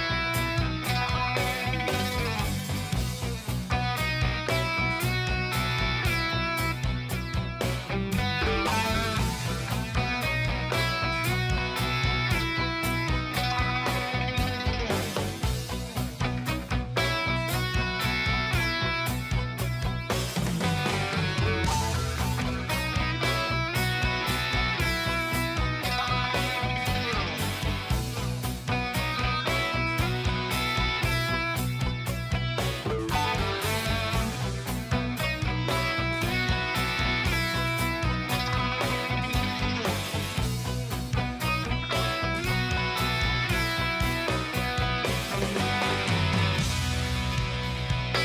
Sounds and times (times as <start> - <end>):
Music: 0.0 - 48.2.